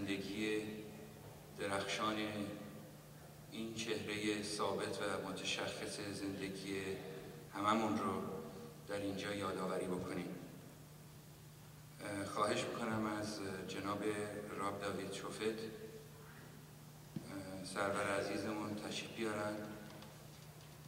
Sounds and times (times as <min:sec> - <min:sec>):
Male speech, man speaking: 0:00.0 - 0:00.9, 0:01.6 - 0:02.7, 0:03.6 - 0:10.4, 0:12.0 - 0:15.8, 0:17.2 - 0:19.8
Narration, monologue: 0:00.0 - 0:20.8.